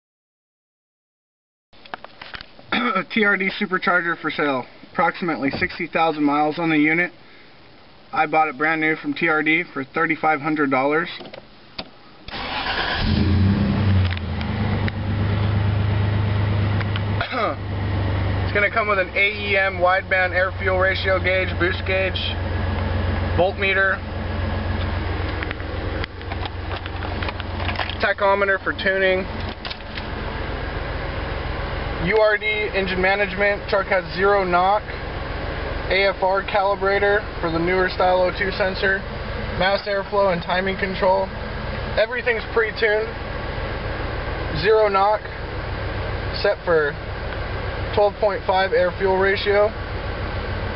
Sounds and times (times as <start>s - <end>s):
Speech: 2.7s - 7.2s, 8.1s - 11.3s, 17.2s - 17.6s, 18.5s - 22.4s, 23.4s - 24.0s, 28.0s - 29.3s, 32.0s - 35.0s, 35.9s - 41.4s, 42.0s - 43.2s, 44.5s - 45.4s, 46.3s - 47.0s, 47.9s - 49.8s
Car: 11.0s - 50.7s
Engine: 11.2s - 50.7s.